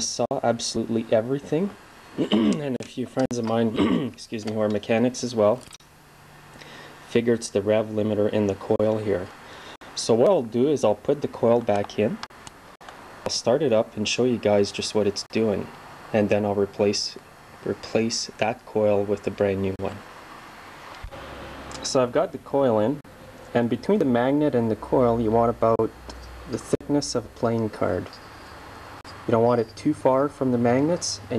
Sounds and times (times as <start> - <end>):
Speech: 0.0 - 5.6, 7.1 - 9.3, 10.0 - 12.3, 13.3 - 20.0, 21.8 - 23.0, 23.6 - 28.2, 29.2 - 31.3.